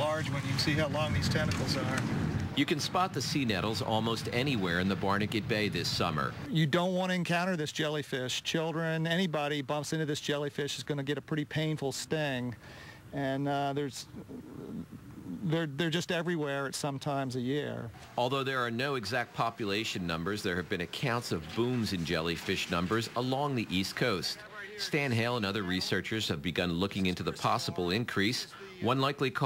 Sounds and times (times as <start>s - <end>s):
Speech: 0.0s - 2.0s, 2.6s - 14.2s, 15.4s - 29.4s.